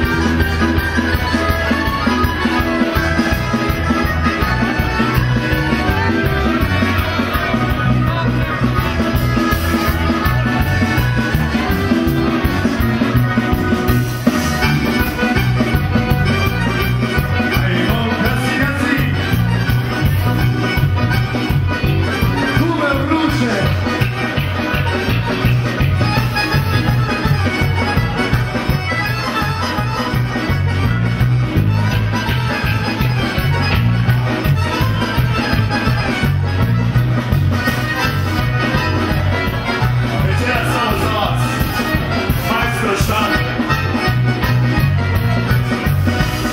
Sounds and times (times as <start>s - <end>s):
Music: 0.0s - 46.5s.